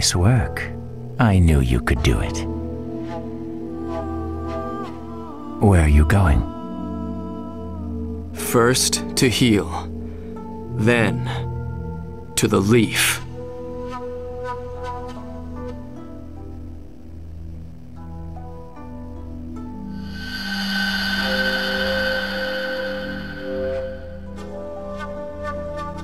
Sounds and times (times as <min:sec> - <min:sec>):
Flute: 0:02.6 - 0:08.1, 0:13.4 - 0:15.4, 0:20.0 - 0:26.0.